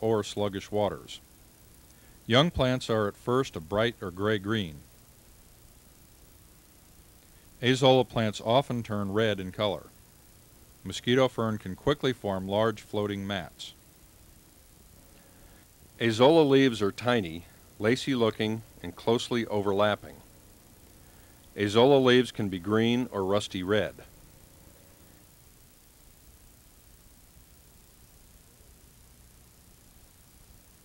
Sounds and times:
Speech: 0.0 - 1.2, 2.3 - 4.9, 7.6 - 10.0, 10.8 - 13.8, 16.0 - 20.2, 21.6 - 24.1.

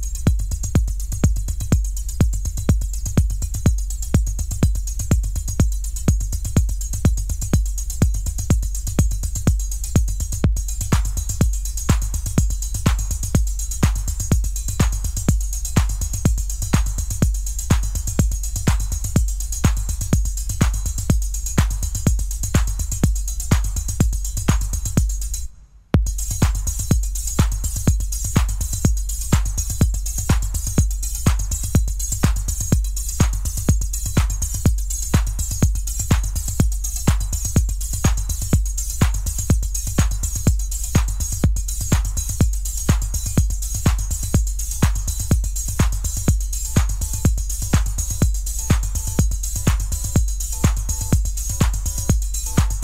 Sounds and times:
Drum machine: 0.0 - 52.8
Techno: 0.0 - 52.8.

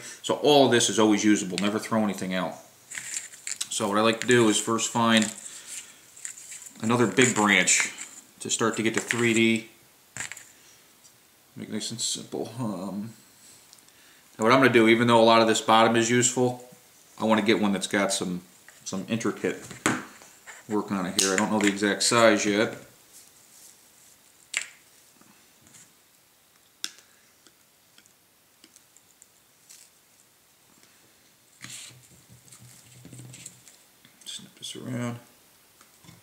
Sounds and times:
Speech: 0.0 - 2.7, 3.6 - 5.4, 6.8 - 9.7, 11.6 - 13.2, 14.4 - 19.7, 20.7 - 22.9, 34.2 - 35.3
Inside, small room: 0.0 - 36.2.

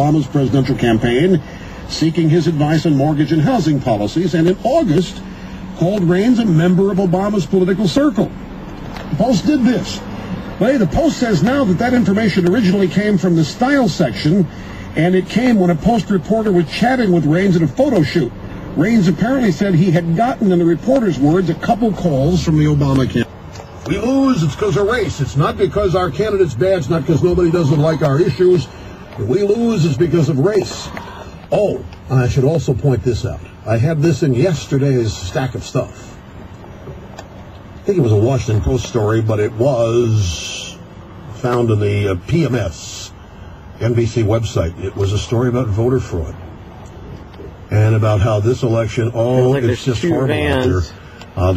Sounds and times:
Speech: 0.0 - 5.2, 5.8 - 8.4, 9.0 - 23.3, 23.9 - 36.2, 37.8 - 43.2, 43.8 - 46.4, 47.7 - 51.5.

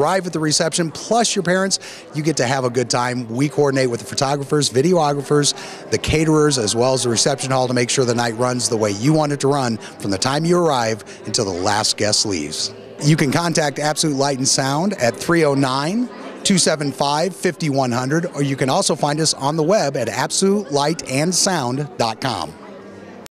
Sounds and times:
Hubbub, speech noise, speech babble: 0.0 - 23.3
Speech: 0.0 - 23.3.

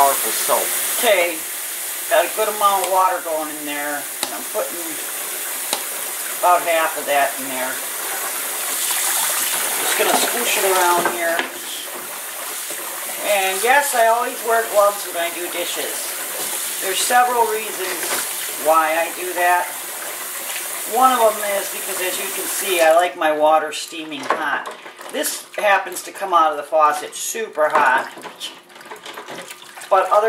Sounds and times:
Speech: 0.0 - 1.4, 2.1 - 5.0, 6.4 - 7.8, 9.9 - 11.9, 13.2 - 16.1, 16.8 - 19.8, 20.9 - 28.6, 29.9 - 30.2.

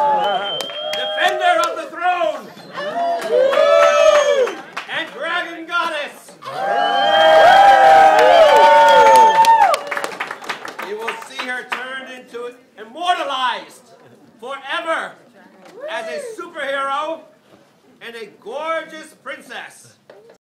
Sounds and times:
Male speech, man speaking: 1.0 - 2.4, 4.9 - 6.3, 10.8 - 15.2, 15.9 - 17.3, 18.0 - 20.0.

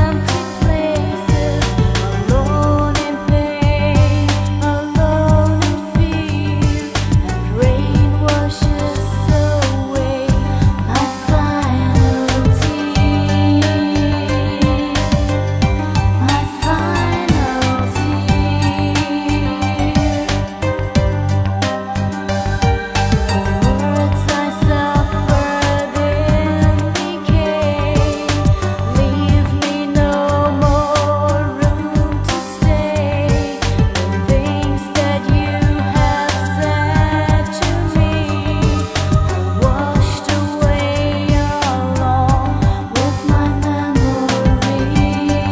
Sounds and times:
Music: 0.0 - 45.5.

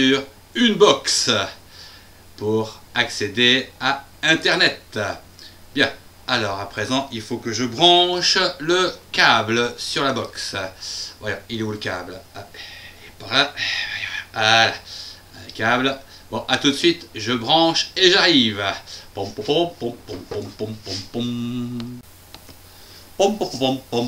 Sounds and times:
Speech: 0.0 - 1.6, 2.4 - 5.2, 5.8 - 21.6, 23.2 - 24.0.

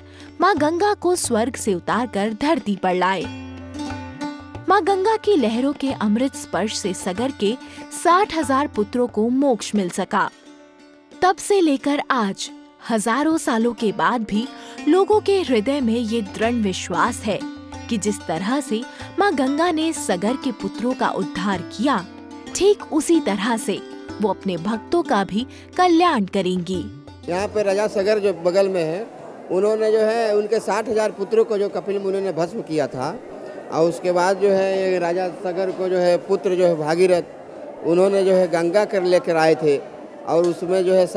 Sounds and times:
Sitar: 0.0 - 29.0.

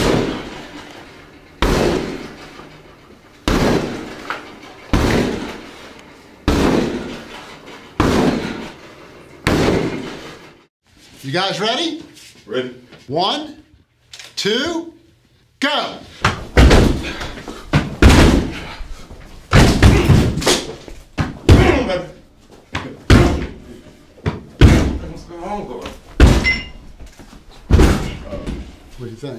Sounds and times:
Speech: 11.2 - 13.7, 14.4 - 16.1, 25.0 - 26.0, 28.3 - 29.3.

